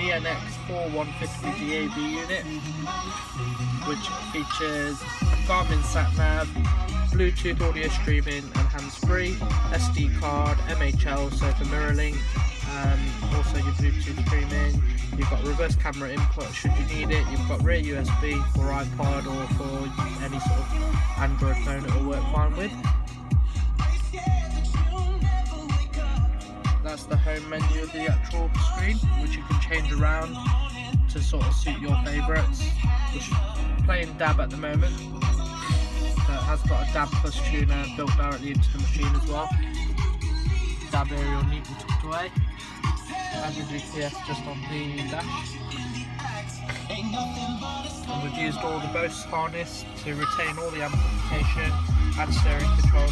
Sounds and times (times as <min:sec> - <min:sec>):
Speech: 0:00.0 - 0:03.1, 0:03.8 - 0:06.6, 0:07.2 - 0:22.8, 0:26.8 - 0:30.4, 0:31.1 - 0:32.7, 0:33.9 - 0:35.0, 0:36.2 - 0:39.6, 0:40.9 - 0:42.4, 0:43.3 - 0:45.5, 0:48.1 - 0:53.1
Music: 0:00.0 - 0:53.1.